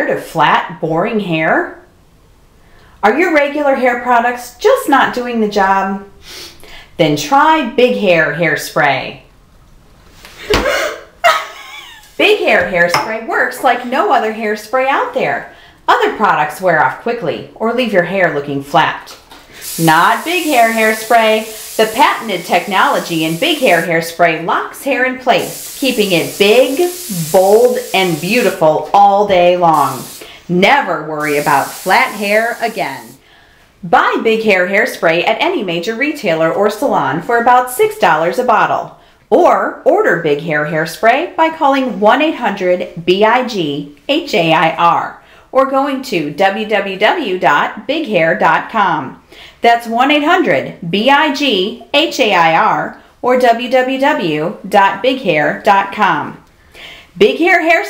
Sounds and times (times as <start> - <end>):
Speech: 0.0 - 1.8, 3.0 - 6.1, 7.0 - 9.3, 12.2 - 33.2, 33.8 - 56.4, 57.2 - 57.8
Spray: 19.6 - 24.0, 25.3 - 28.8, 29.6 - 30.5, 31.2 - 33.2.